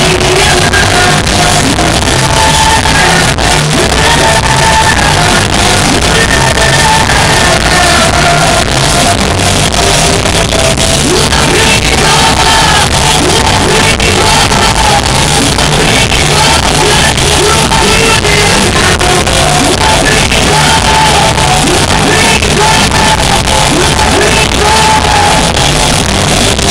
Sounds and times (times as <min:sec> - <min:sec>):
Music: 0:00.0 - 0:26.7.